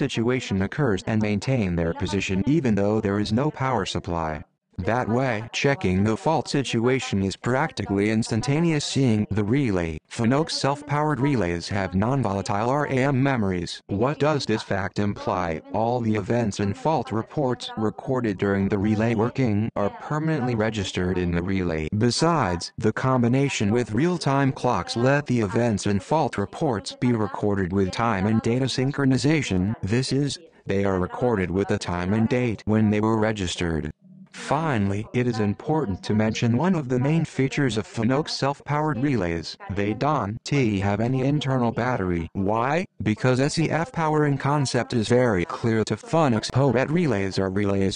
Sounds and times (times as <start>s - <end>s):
Sidetone: 0.0s - 47.9s
Speech: 0.0s - 47.9s.